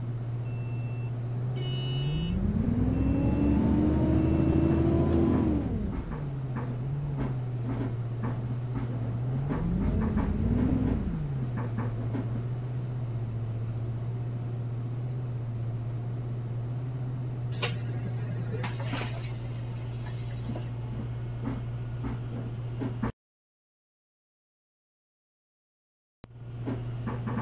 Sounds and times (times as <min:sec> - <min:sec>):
Bus: 0:00.0 - 0:23.2, 0:26.2 - 0:27.4.